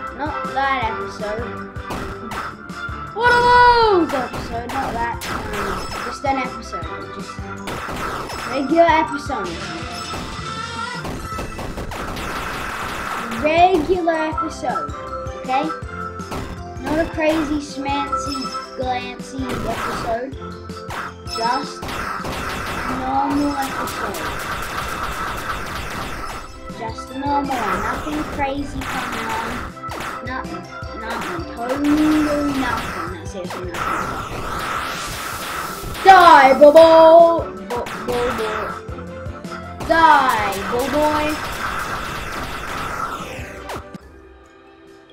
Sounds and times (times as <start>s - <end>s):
Speech: 0.2s - 1.5s, 3.2s - 6.9s, 16.8s - 20.3s, 21.4s - 21.8s, 23.0s - 24.2s, 26.8s - 29.6s, 30.3s - 33.8s, 36.1s - 38.7s, 39.8s - 41.4s.